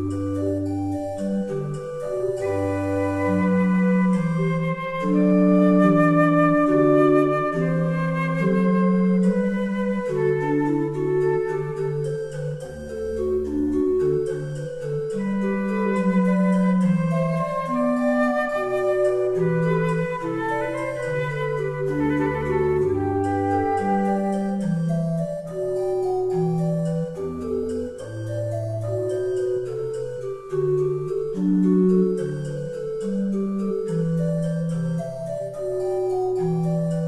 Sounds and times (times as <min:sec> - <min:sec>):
Flute: 0:00.0 - 0:37.0.